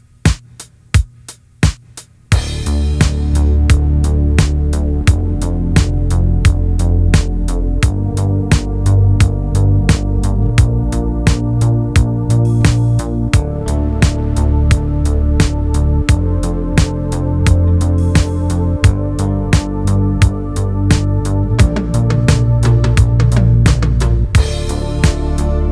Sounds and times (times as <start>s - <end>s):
Electronica: 2.4s - 25.7s.